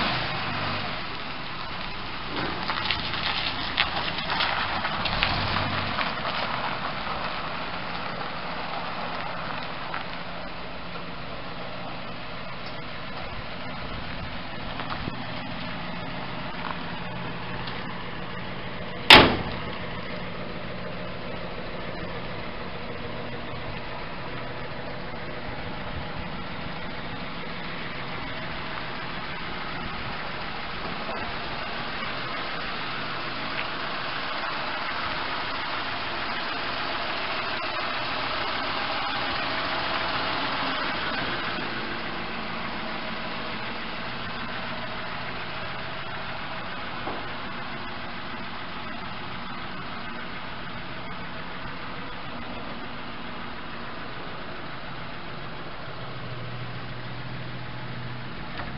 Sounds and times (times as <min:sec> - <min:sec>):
Truck: 0:00.0 - 0:58.7.